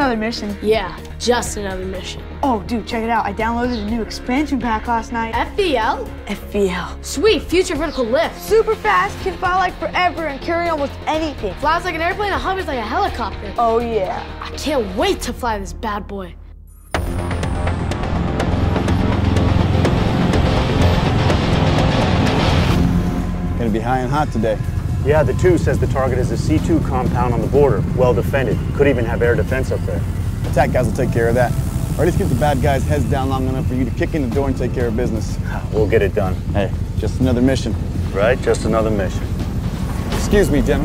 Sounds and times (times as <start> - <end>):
Music: 0.0 - 40.8.